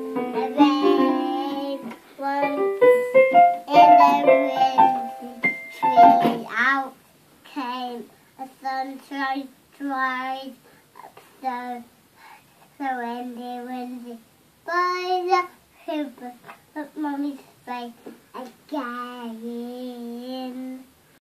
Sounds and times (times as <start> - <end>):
Child singing: 0.0 - 11.9, 12.8 - 20.9.